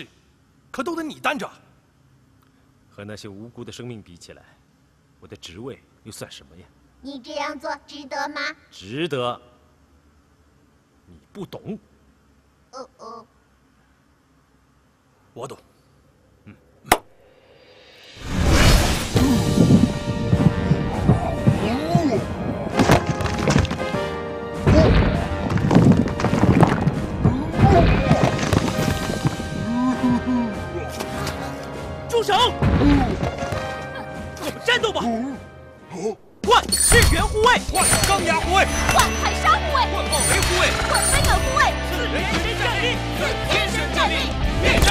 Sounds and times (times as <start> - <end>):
Music: 19.0 - 36.0, 37.9 - 44.9.